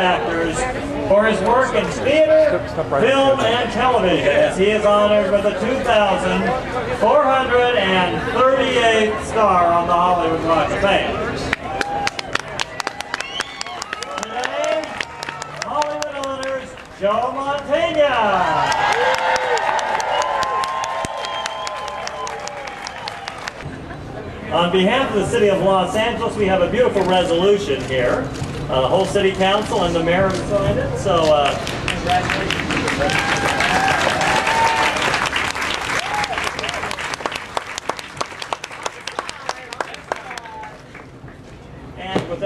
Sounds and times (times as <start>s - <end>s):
Male speech, man speaking: 0.0s - 11.5s, 14.1s - 15.0s, 15.6s - 18.7s, 24.4s - 32.6s, 42.0s - 42.4s.